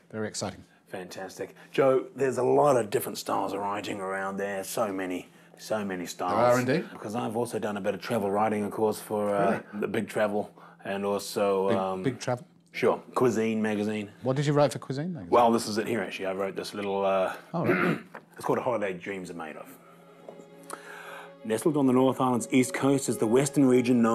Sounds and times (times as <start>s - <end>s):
Speech: 0.1s - 17.8s, 21.5s - 24.1s.